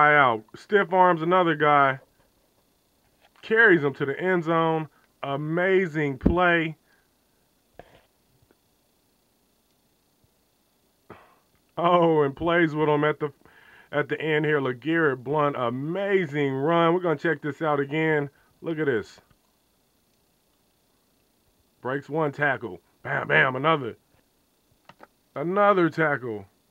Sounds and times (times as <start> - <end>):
Speech: 0.0 - 2.0, 3.4 - 6.8, 11.8 - 19.3, 21.8 - 24.0, 25.4 - 26.5.